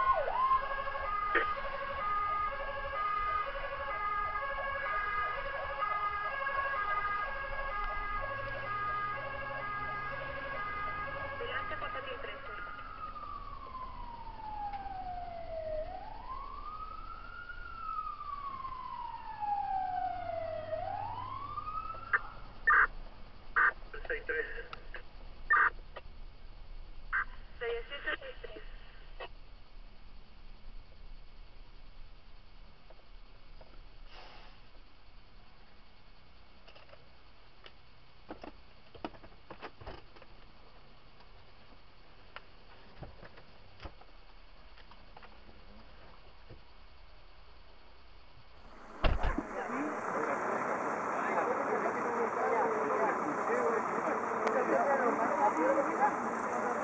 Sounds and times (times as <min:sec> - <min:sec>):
Fire engine, fire truck (siren): 0:00.0 - 0:22.9, 0:48.7 - 0:56.8
Speech: 0:11.4 - 0:12.7, 0:49.3 - 0:56.8.